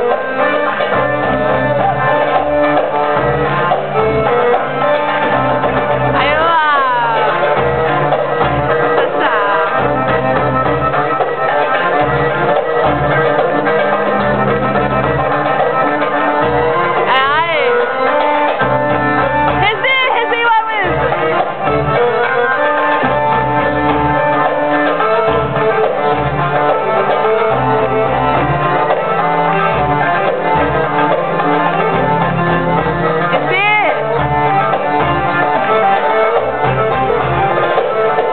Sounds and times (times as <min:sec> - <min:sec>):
Music: 0:00.0 - 0:38.3.